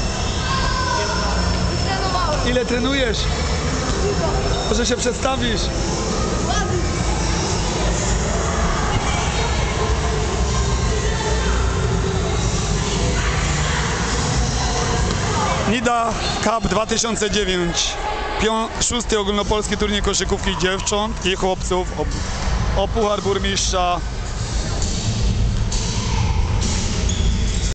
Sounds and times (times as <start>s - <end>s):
Speech: 22.8s - 24.0s.